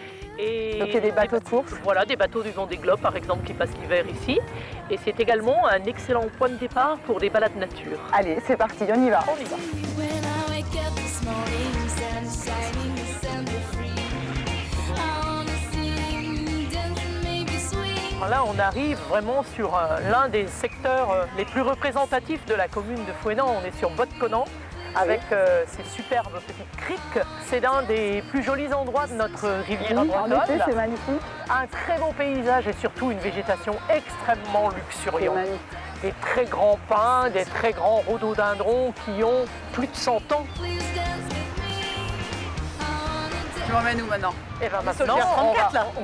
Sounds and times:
Music: 0.0 - 46.0
Speech: 0.4 - 9.6, 18.2 - 40.5.

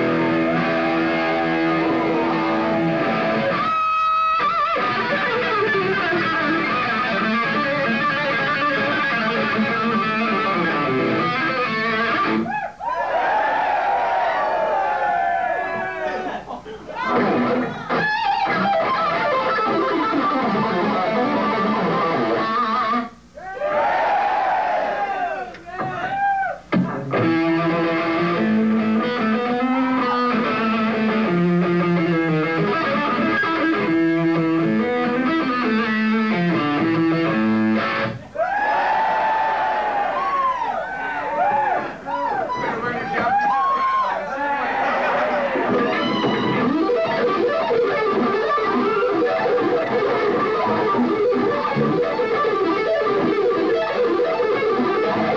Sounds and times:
Music: 0.0 - 12.5, 17.1 - 23.2, 26.7 - 38.2, 45.7 - 55.3.

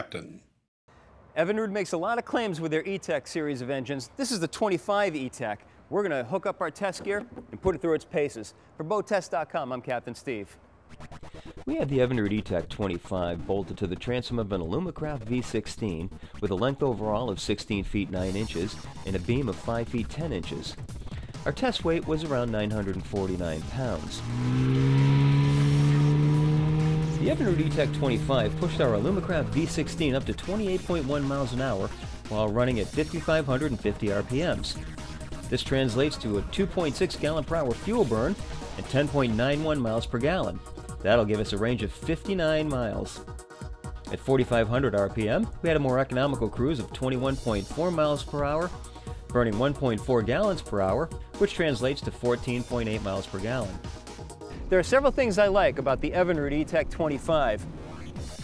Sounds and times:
Speech: 0.0 - 0.4, 1.4 - 10.6, 11.7 - 20.8, 21.4 - 24.2, 27.2 - 34.8, 35.5 - 43.2, 44.1 - 48.7, 49.3 - 53.8, 54.7 - 57.6
Music: 11.0 - 24.2, 25.9 - 58.4
Medium engine (mid frequency): 22.4 - 32.3
Accelerating, revving, vroom: 24.0 - 30.3.

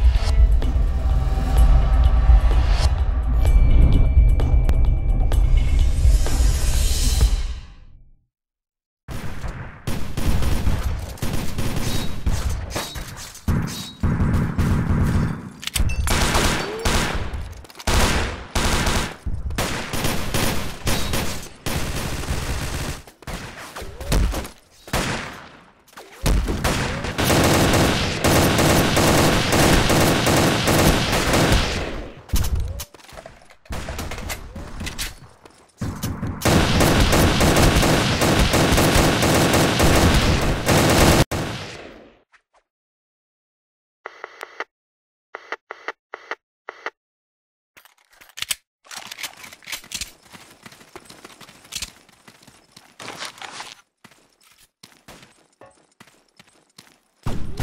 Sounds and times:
Fusillade: 16.1 - 25.5, 26.2 - 32.3, 36.4 - 42.0.

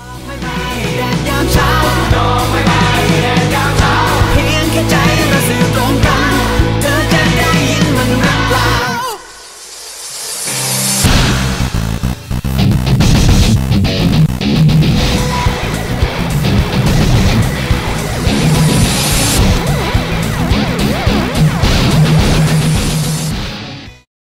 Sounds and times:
Music: 0.0 - 24.1.

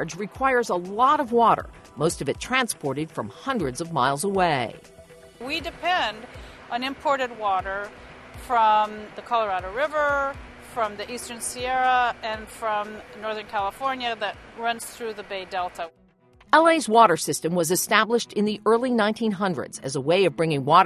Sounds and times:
Speech: 0.0 - 4.8, 5.4 - 6.2, 6.8 - 7.9, 8.5 - 15.9, 16.6 - 20.8
Music: 0.0 - 20.8.

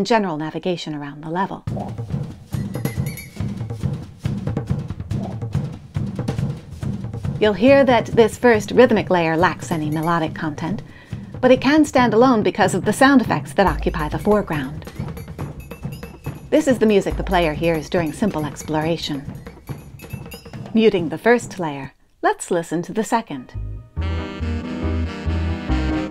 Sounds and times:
Speech: 0.0 - 1.7, 7.4 - 14.8, 16.6 - 19.3, 20.7 - 23.6
Music: 1.7 - 21.6, 23.4 - 26.1.

